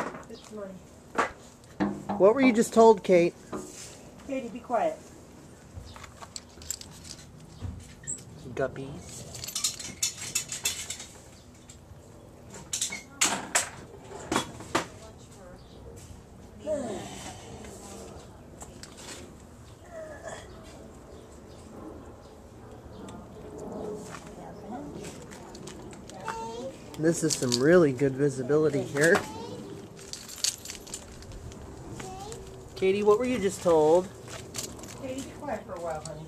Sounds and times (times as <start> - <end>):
Outside, rural or natural: 0.0 - 36.2.